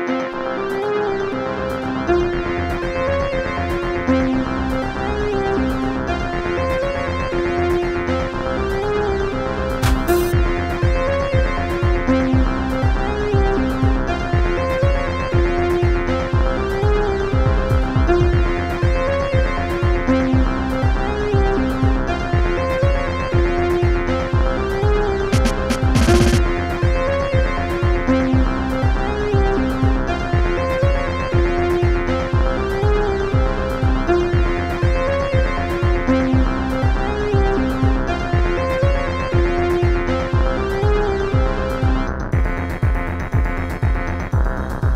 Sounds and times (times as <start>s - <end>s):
Music: 0.0s - 44.9s.